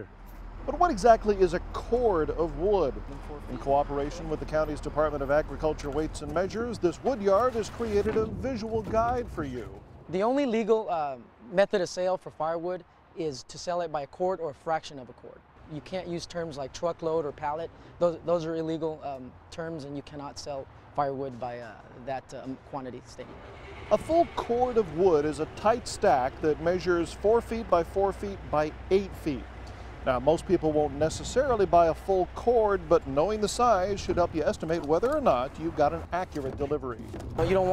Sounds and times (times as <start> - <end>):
Speech: 0.7 - 29.4, 30.0 - 37.7.